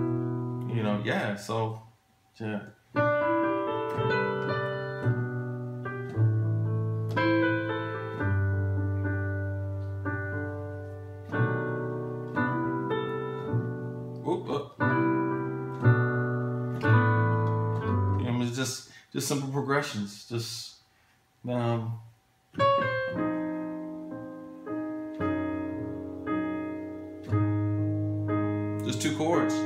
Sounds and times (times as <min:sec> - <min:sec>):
Keyboard (musical): 0:00.0 - 0:01.2, 0:02.9 - 0:18.6, 0:22.6 - 0:29.6.